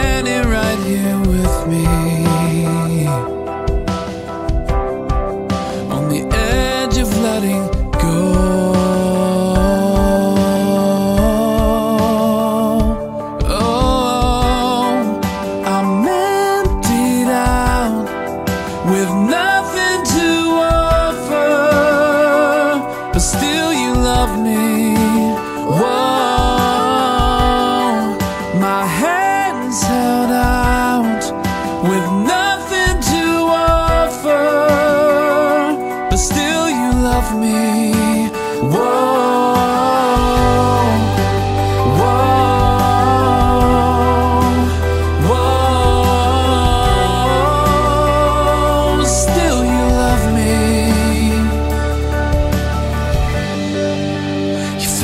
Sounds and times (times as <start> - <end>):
Music: 0.0 - 55.0.